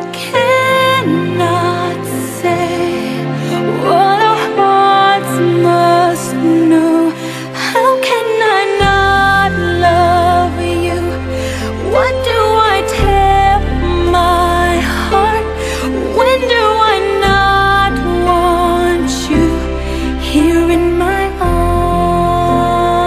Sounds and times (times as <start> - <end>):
Music: 0.0 - 23.0.